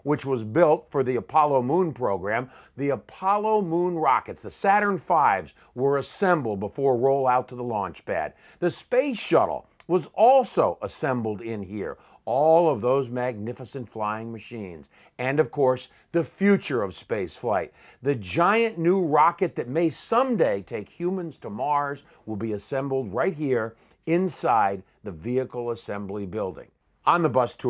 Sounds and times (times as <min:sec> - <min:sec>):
Speech: 0:00.0 - 0:27.7.